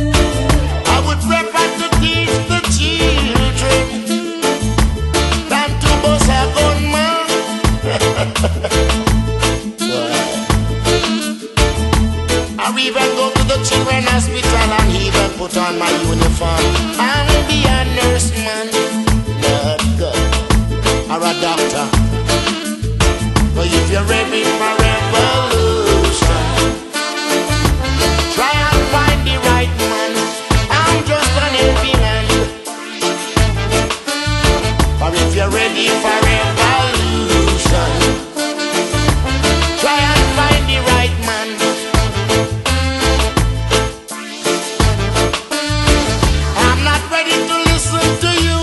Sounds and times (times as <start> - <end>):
Reggae: 0.0 - 48.6.